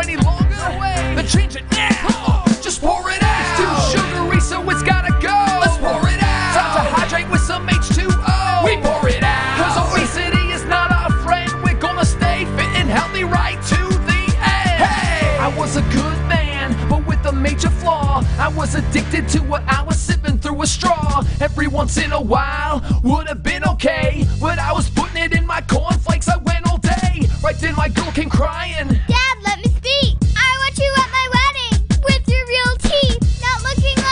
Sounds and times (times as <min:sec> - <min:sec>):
Music: 0:00.0 - 0:34.1.